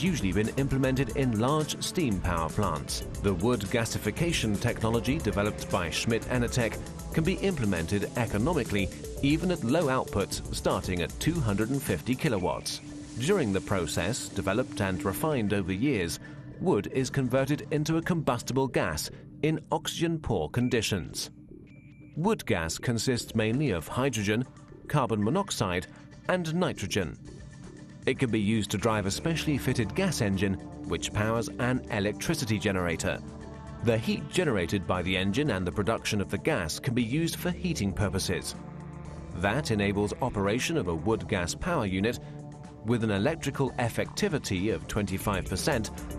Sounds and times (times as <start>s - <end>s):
Speech: 0.0s - 21.3s, 22.2s - 27.2s, 28.1s - 33.2s, 33.8s - 38.6s, 39.4s - 42.2s, 42.8s - 46.0s
Music: 0.0s - 46.1s.